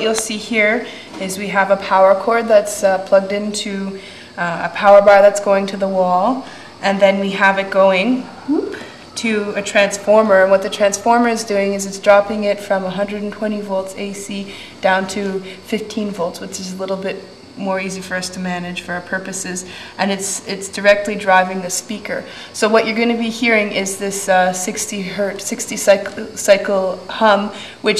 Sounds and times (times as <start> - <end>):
Speech: 0.0 - 27.9.